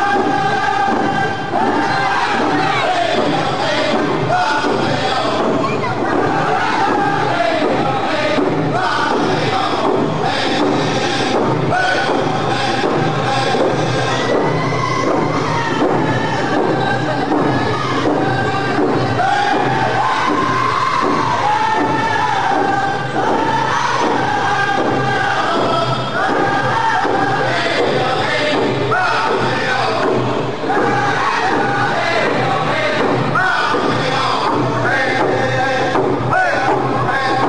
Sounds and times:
Male singing: 0.0s - 14.6s, 15.4s - 37.4s
Drum: 0.0s - 37.4s
Speech: 0.6s - 14.5s, 15.5s - 20.4s.

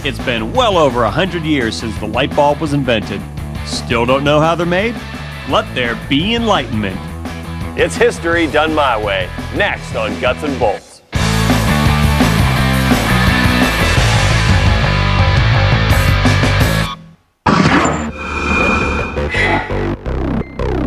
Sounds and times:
Speech: 0.0s - 7.1s, 7.8s - 11.0s
Music: 0.0s - 17.2s, 19.0s - 20.8s.

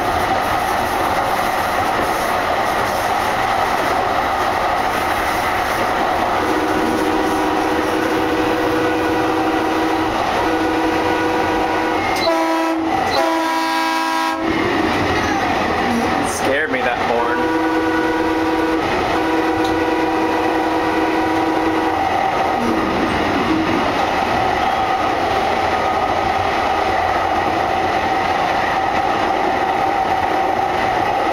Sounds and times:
Train horn: 6.4s - 14.6s, 17.1s - 22.0s
Train whistle: 6.4s - 14.6s, 17.2s - 22.0s.

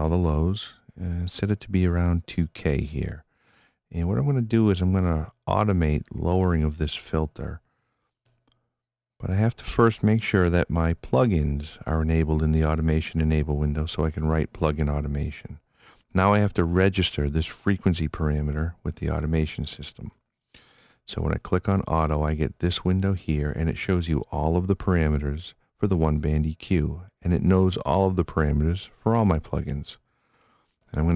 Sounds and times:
Speech: 0.0s - 3.3s, 3.9s - 7.7s, 9.2s - 20.2s, 21.1s - 30.0s, 30.9s - 31.1s.

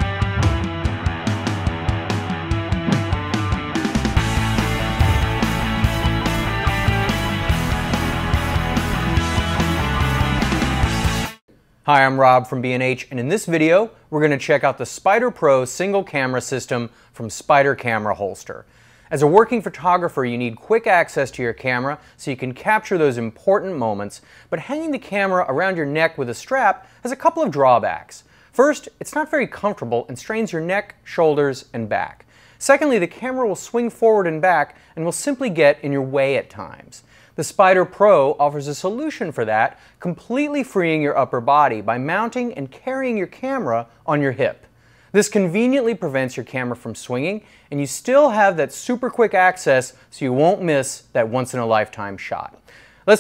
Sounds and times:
Speech: 11.9s - 53.2s.

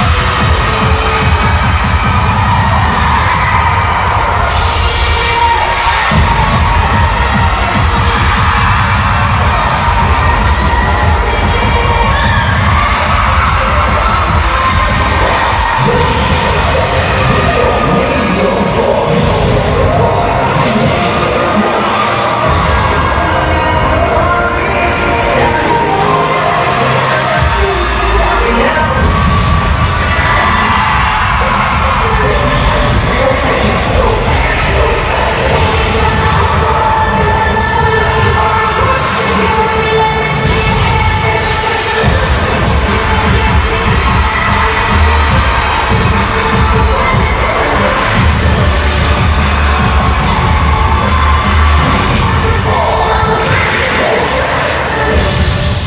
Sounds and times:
Cheering: 0.0s - 55.8s
Music: 0.0s - 55.8s.

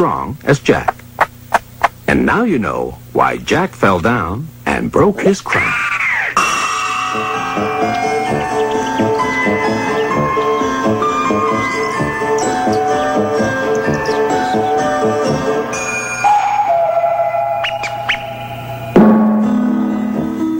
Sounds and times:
Speech: 0.0s - 1.0s, 2.1s - 6.4s
Music: 6.4s - 20.5s.

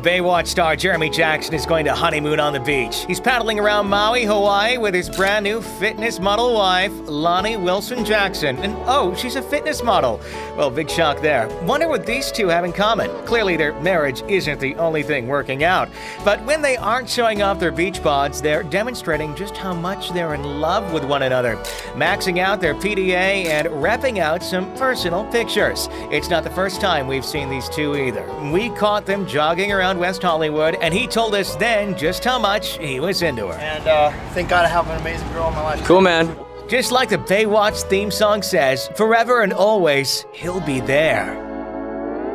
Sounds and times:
Speech: 0.0s - 41.4s
Music: 0.0s - 42.3s.

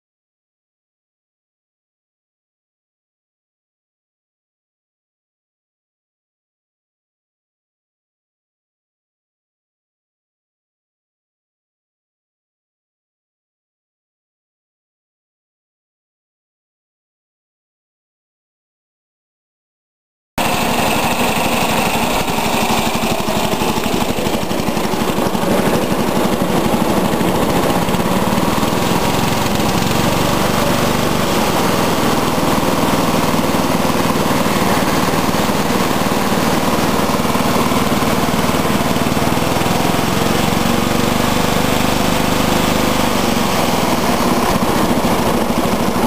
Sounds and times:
Vehicle: 20.4s - 46.0s.

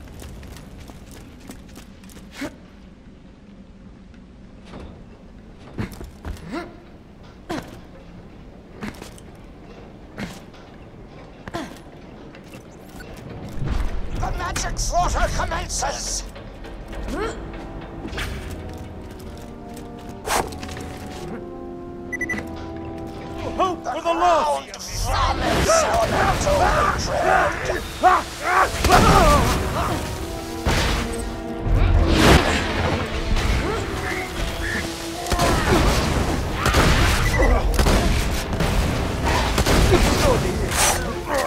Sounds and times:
Music: 6.5s - 41.4s
Speech: 14.2s - 16.3s, 23.5s - 27.8s.

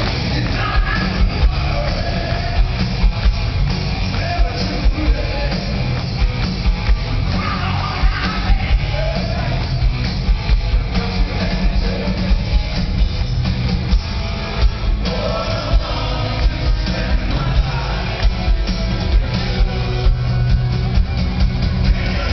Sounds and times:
Music: 0.0s - 22.3s.

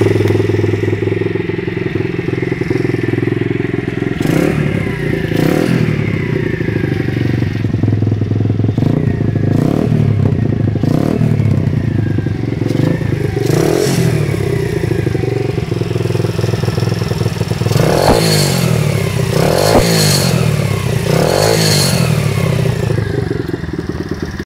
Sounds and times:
Medium engine (mid frequency): 0.0s - 24.4s
Vehicle: 0.0s - 24.4s
Accelerating, revving, vroom: 4.2s - 4.6s, 5.4s - 5.9s, 8.8s - 10.0s, 10.8s - 11.3s, 12.7s - 14.2s, 17.7s - 22.6s.

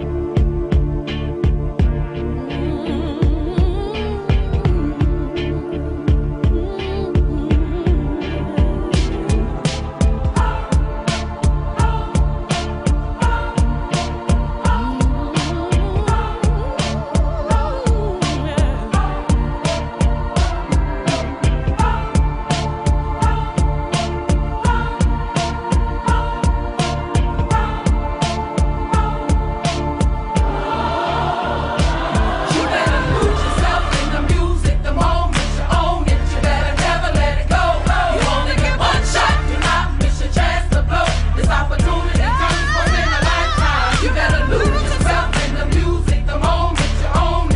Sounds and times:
Music: 0.0s - 47.5s.

